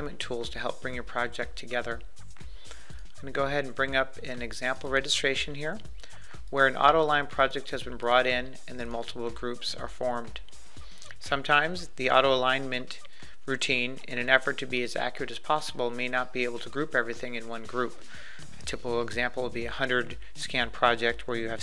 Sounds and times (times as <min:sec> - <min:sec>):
Speech: 0:00.0 - 0:02.0, 0:03.2 - 0:05.8, 0:06.5 - 0:10.4, 0:11.2 - 0:18.0, 0:18.7 - 0:21.6
Music: 0:00.0 - 0:21.6.